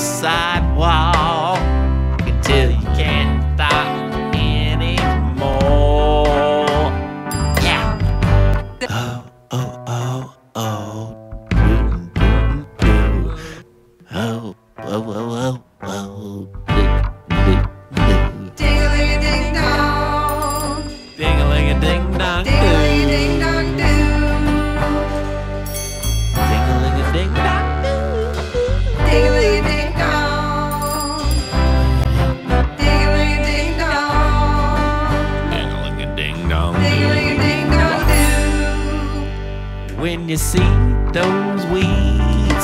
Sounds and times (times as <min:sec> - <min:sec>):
Christmas music: 0:00.0 - 0:09.9, 0:16.6 - 0:42.6.